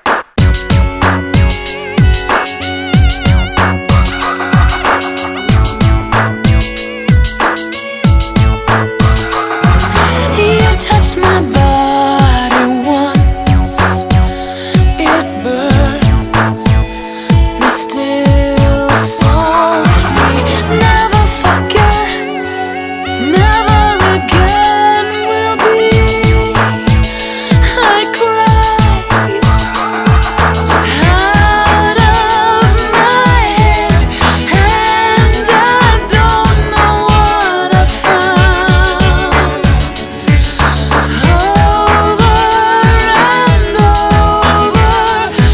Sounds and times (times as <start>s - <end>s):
Music: 0.0s - 45.5s.